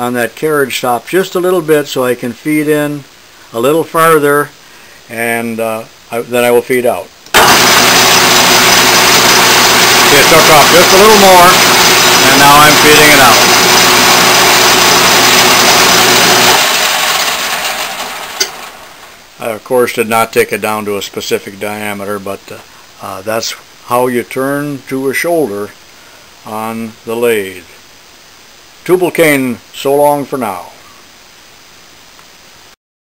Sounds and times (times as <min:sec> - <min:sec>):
Speech: 0:00.0 - 0:07.1, 0:10.1 - 0:11.6, 0:12.2 - 0:13.5, 0:19.4 - 0:25.8, 0:26.4 - 0:27.8, 0:28.8 - 0:30.8
Power tool: 0:07.3 - 0:19.3.